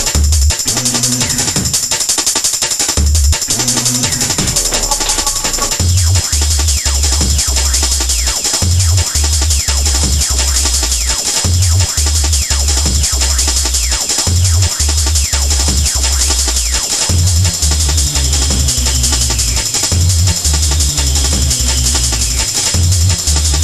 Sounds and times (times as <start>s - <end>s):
Happy music: 0.0s - 23.6s
Jazz: 3.0s - 23.6s.